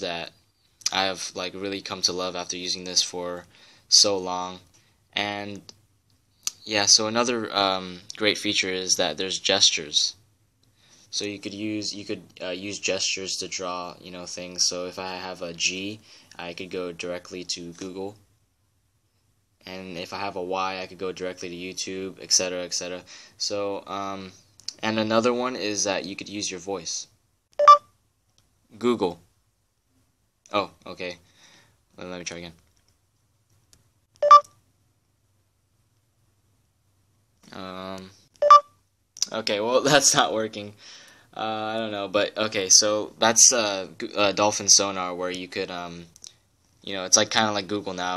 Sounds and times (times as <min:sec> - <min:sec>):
Speech: 0:00.0 - 0:05.8, 0:06.5 - 0:10.2, 0:11.1 - 0:18.2, 0:19.6 - 0:27.1, 0:28.7 - 0:29.3, 0:30.5 - 0:31.2, 0:32.0 - 0:32.6, 0:37.4 - 0:38.2, 0:39.2 - 0:40.8, 0:41.4 - 0:46.2, 0:46.8 - 0:48.1.